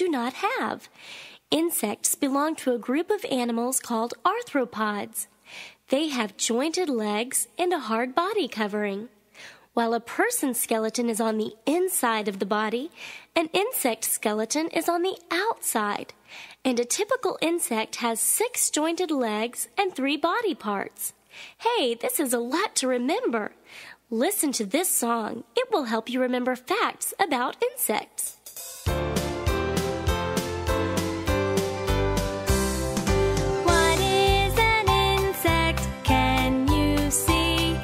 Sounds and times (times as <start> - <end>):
Speech: 0.0 - 0.9, 1.5 - 5.3, 5.9 - 9.1, 9.8 - 28.4.